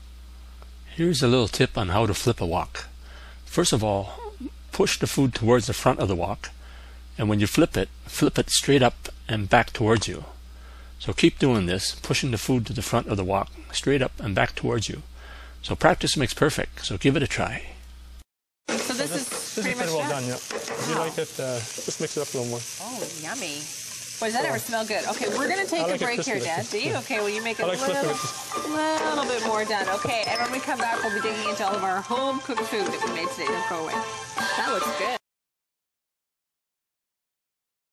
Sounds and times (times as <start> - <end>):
Frying (food): 0.0 - 16.9, 18.7 - 35.2.